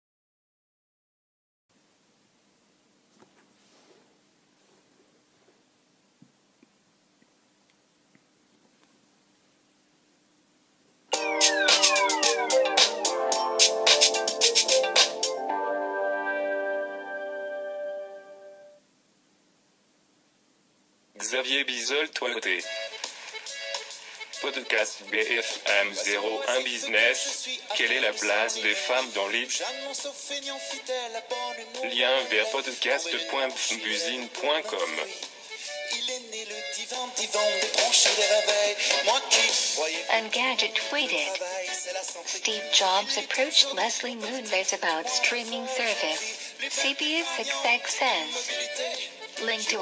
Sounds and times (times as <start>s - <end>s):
Music: 11.1s - 18.8s, 22.3s - 49.8s
Speech: 21.2s - 22.7s, 24.4s - 29.6s, 31.8s - 35.2s, 40.1s - 41.4s, 42.3s - 48.5s, 49.4s - 49.8s.